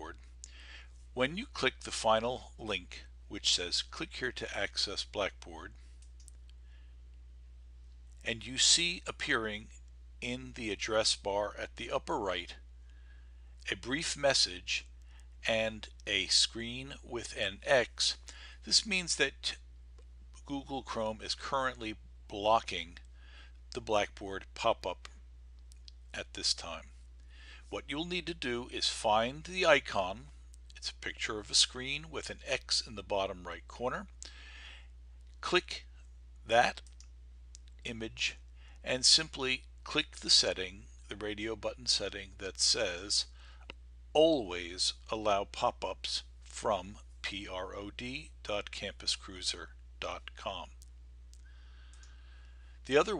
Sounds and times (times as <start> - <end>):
Speech: 0.0 - 0.2, 1.2 - 5.8, 8.2 - 12.6, 13.6 - 19.6, 20.4 - 23.0, 23.8 - 25.1, 26.1 - 27.0, 27.7 - 34.2, 35.4 - 35.9, 36.5 - 36.9, 37.8 - 43.4, 44.2 - 50.8, 52.9 - 53.1.